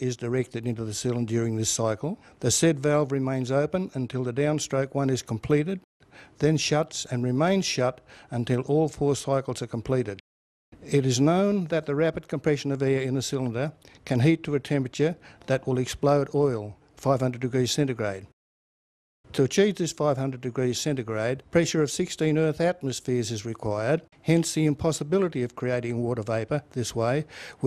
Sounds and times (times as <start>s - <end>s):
Speech: 0.0s - 10.2s, 10.8s - 18.3s, 19.3s - 27.6s.